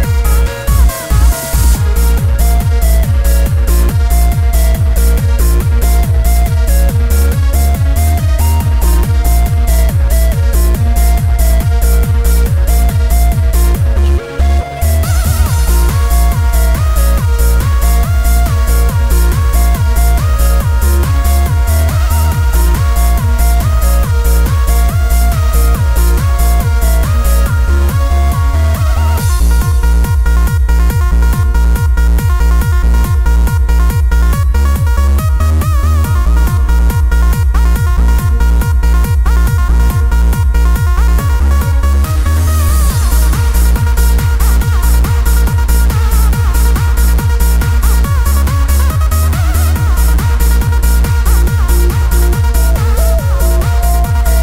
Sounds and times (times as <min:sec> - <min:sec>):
Techno: 0:00.0 - 0:54.4.